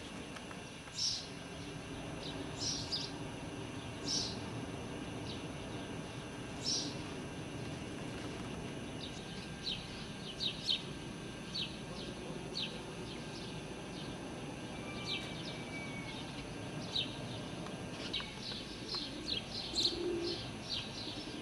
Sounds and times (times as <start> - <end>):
Bird: 14.8 - 17.4, 18.0 - 21.4.